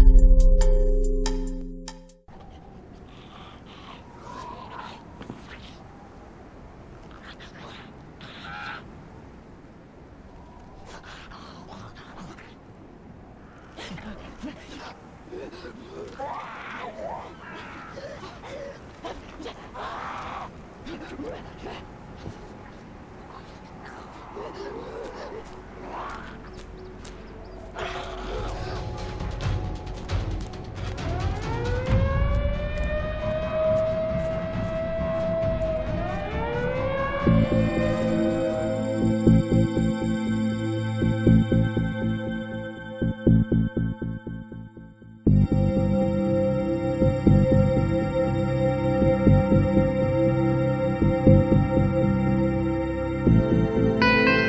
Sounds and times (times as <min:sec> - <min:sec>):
Music: 0:00.0 - 0:02.3, 0:26.6 - 0:33.4, 0:34.5 - 0:54.4
Animal: 0:02.4 - 0:06.0, 0:07.0 - 0:08.9, 0:14.7 - 0:20.6, 0:21.2 - 0:29.6.